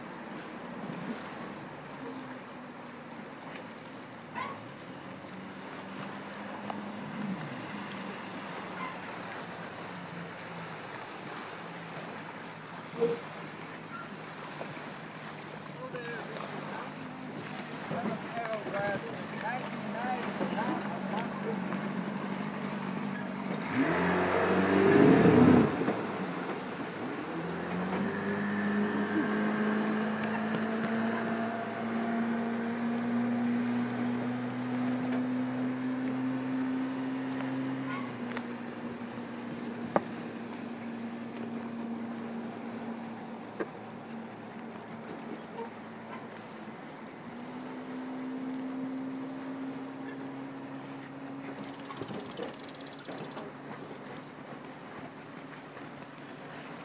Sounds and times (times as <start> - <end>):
Motorboat, speedboat: 0.0 - 56.8
Waves, surf: 0.0 - 56.8
Speech: 15.8 - 17.0, 17.9 - 21.7.